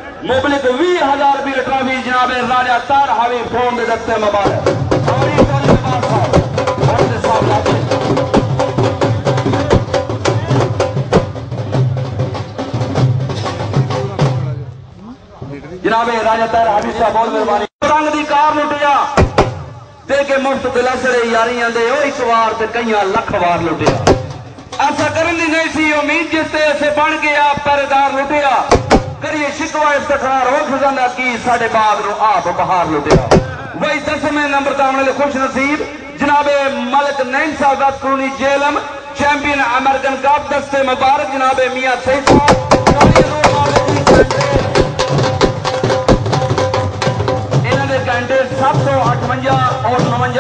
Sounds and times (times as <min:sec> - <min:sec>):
Speech: 0:00.0 - 0:07.9, 0:13.9 - 0:19.2, 0:20.1 - 0:24.0, 0:24.8 - 0:44.8, 0:47.6 - 0:50.4
Music: 0:04.4 - 0:14.7, 0:23.9 - 0:25.1, 0:42.3 - 0:50.4.